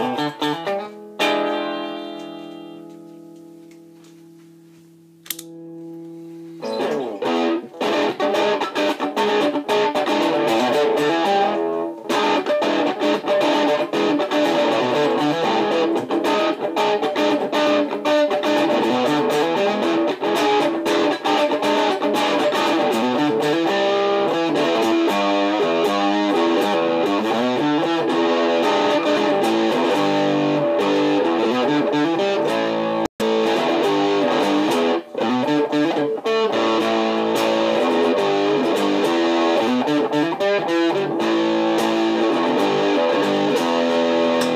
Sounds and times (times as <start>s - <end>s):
Distortion: 0.0s - 44.5s.